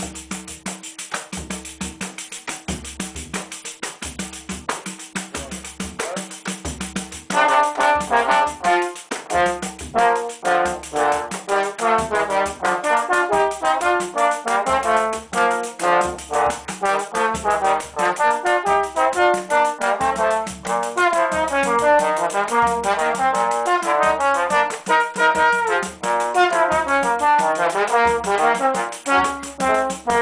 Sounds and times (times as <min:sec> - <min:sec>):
Trombone: 0:07.2 - 0:30.2.